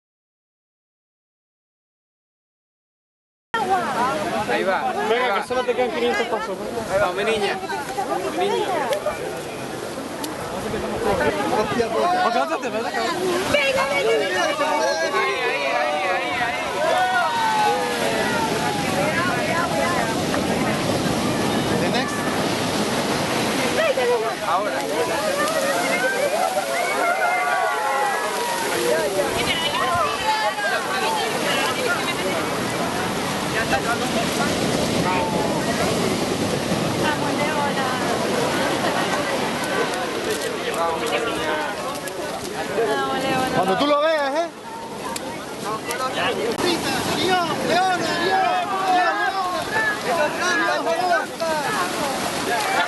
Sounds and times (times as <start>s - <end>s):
Waves, surf: 3.6s - 52.8s
Speech: 37.0s - 52.8s.